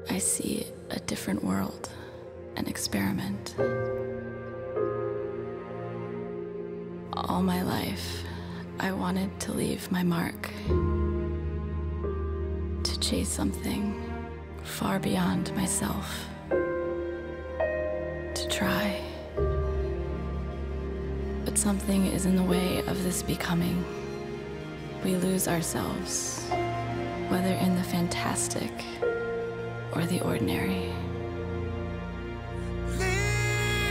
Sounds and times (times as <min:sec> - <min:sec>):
Speech: 0:00.0 - 0:02.0, 0:02.6 - 0:03.6, 0:07.2 - 0:10.6, 0:12.8 - 0:14.1, 0:14.7 - 0:16.3, 0:18.4 - 0:19.2, 0:21.5 - 0:23.9, 0:25.0 - 0:26.5, 0:27.3 - 0:29.0, 0:30.0 - 0:31.1
Music: 0:00.0 - 0:33.9.